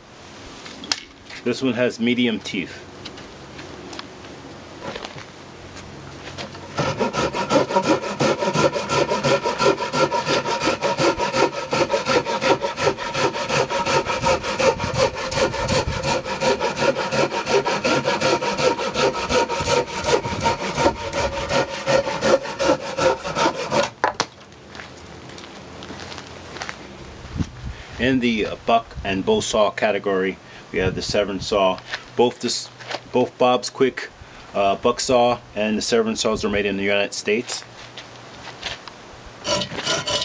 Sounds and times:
Sawing: 6.4s - 24.0s, 39.4s - 40.2s.

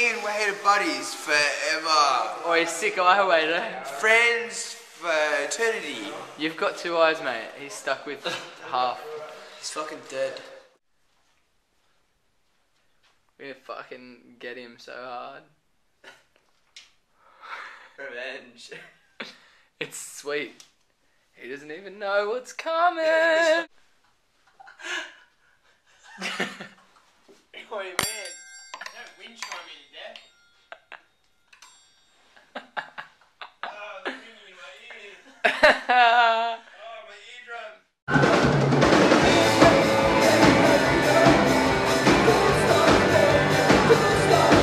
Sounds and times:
Speech: 0.0s - 10.7s, 13.4s - 15.5s, 18.0s - 18.8s, 19.8s - 20.6s, 21.4s - 23.7s, 33.6s - 35.3s, 36.8s - 37.9s.

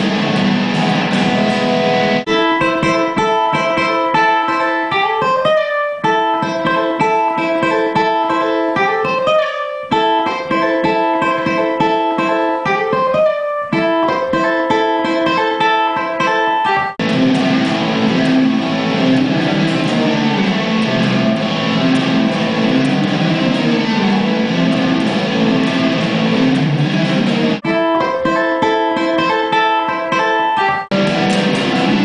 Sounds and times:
Acoustic guitar: 0.0s - 32.0s
Strum: 0.0s - 32.0s.

